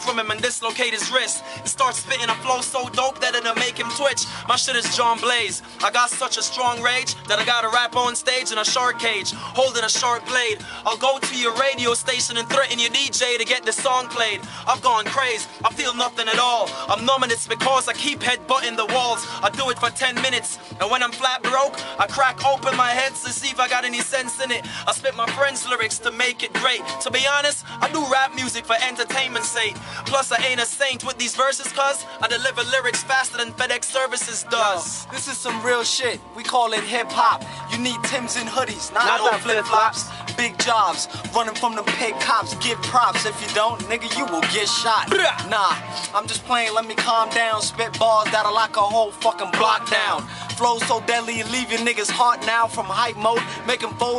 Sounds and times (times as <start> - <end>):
Hip hop music: 0.0 - 54.1.